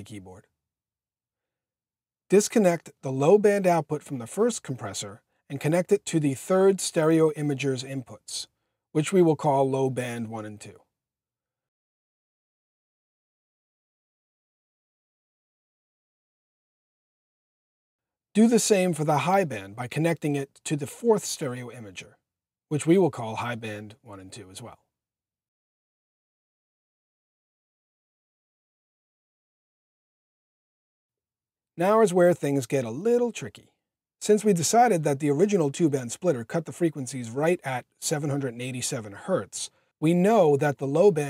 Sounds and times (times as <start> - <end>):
Speech: 0.0 - 0.5, 2.3 - 10.9, 18.4 - 24.9, 31.8 - 41.3.